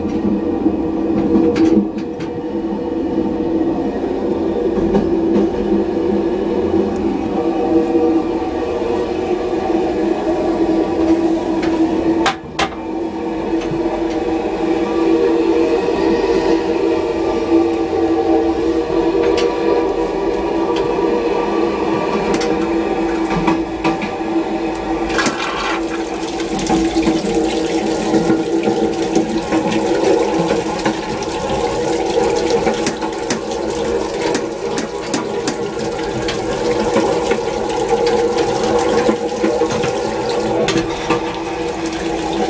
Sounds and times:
Toilet flush: 4.4s - 42.5s.

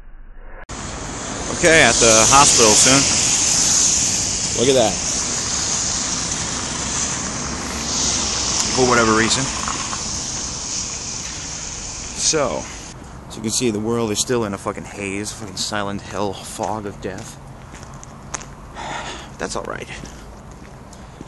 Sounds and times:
Speech: 1.5s - 3.1s, 4.6s - 5.0s, 8.7s - 9.6s, 12.2s - 12.7s, 13.3s - 17.4s, 19.4s - 20.2s.

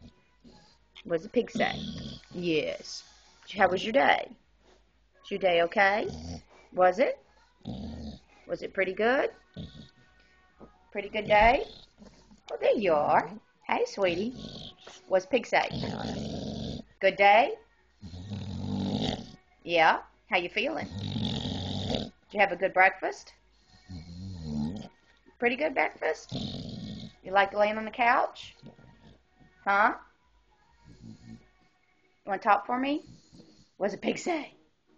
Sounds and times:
Speech: 1.0s - 4.4s, 5.2s - 6.2s, 6.8s - 7.2s, 8.5s - 9.4s, 10.9s - 11.7s, 12.5s - 14.4s, 15.0s - 16.2s, 17.0s - 17.6s, 19.6s - 20.9s, 22.3s - 23.4s, 25.4s - 26.3s, 27.3s - 28.7s, 29.6s - 30.1s, 32.3s - 33.1s, 33.8s - 34.6s.

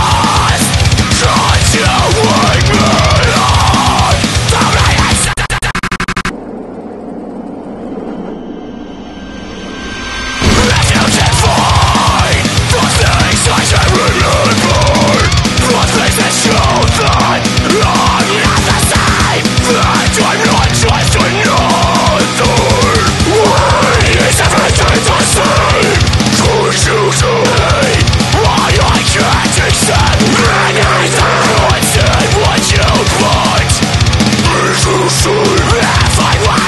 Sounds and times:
Music: 0.0s - 6.3s, 9.0s - 36.6s.

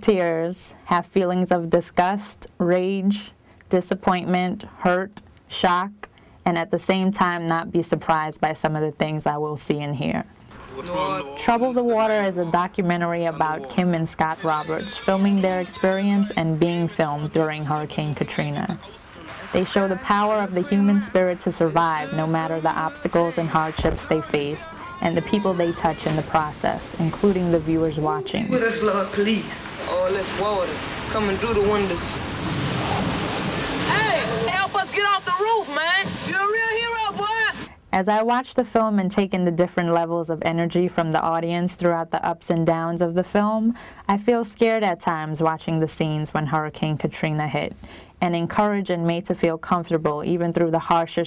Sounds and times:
Speech: 0.0s - 18.9s, 19.6s - 32.1s, 34.0s - 51.2s.

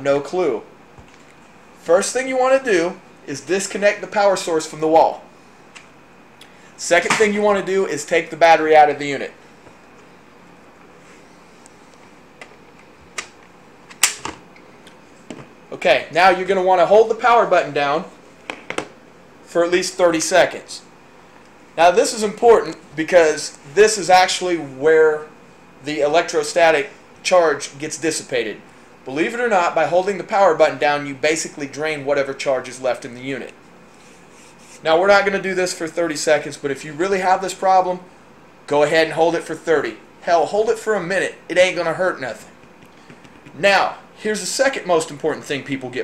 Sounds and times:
Speech: 0.0s - 0.7s, 1.8s - 5.3s, 6.8s - 9.4s, 15.7s - 18.2s, 19.5s - 20.9s, 21.8s - 33.6s, 34.8s - 38.1s, 38.7s - 42.6s, 43.5s - 46.0s.

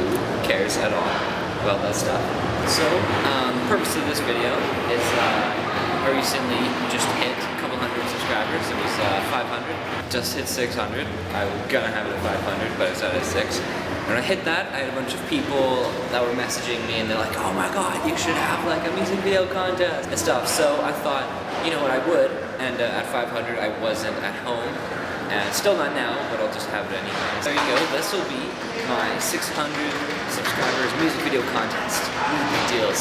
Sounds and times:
Speech: 0.4s - 33.0s.

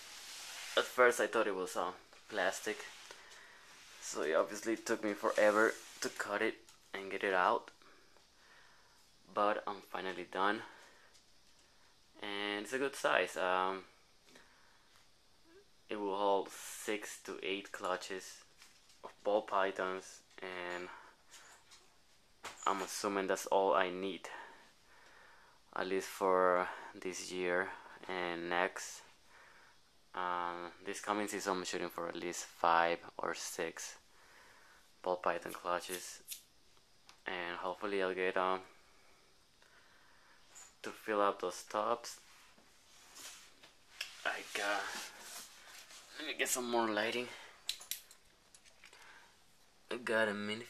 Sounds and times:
Inside, small room: 0.0s - 50.7s
Speech: 0.8s - 2.9s, 4.0s - 7.8s, 9.3s - 10.8s, 12.2s - 13.9s, 15.9s - 21.0s, 22.6s - 24.5s, 25.8s - 29.1s, 30.2s - 34.0s, 35.0s - 36.2s, 37.2s - 38.7s, 40.8s - 42.2s, 44.2s - 45.2s, 46.1s - 47.5s, 49.9s - 50.7s.

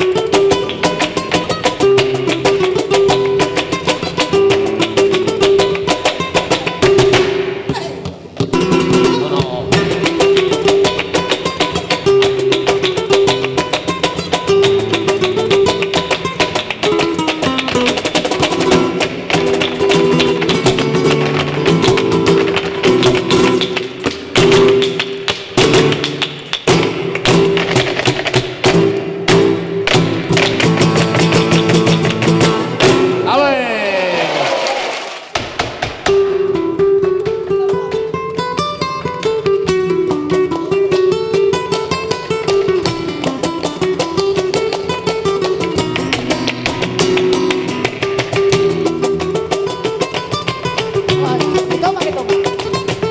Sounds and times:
Flamenco: 0.0s - 53.1s.

